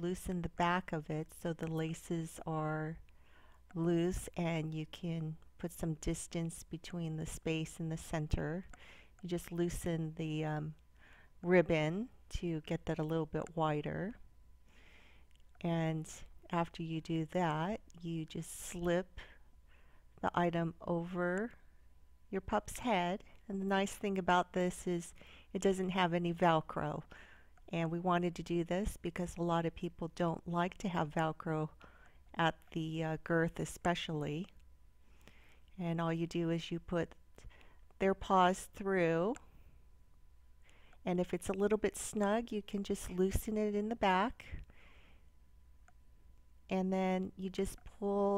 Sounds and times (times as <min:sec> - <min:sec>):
Speech: 0:00.0 - 0:03.0, 0:03.7 - 0:10.8, 0:11.4 - 0:14.2, 0:15.6 - 0:19.3, 0:20.2 - 0:21.6, 0:22.3 - 0:27.1, 0:27.7 - 0:34.6, 0:35.8 - 0:37.2, 0:38.0 - 0:39.4, 0:41.0 - 0:44.6, 0:46.7 - 0:48.3.